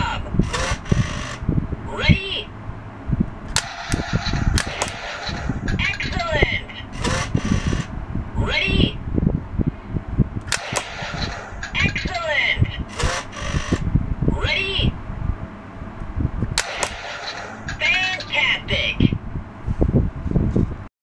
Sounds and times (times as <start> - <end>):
Speech: 1.9 - 2.5, 5.7 - 6.9, 8.4 - 9.0, 11.7 - 12.9, 14.3 - 15.0, 17.8 - 19.2.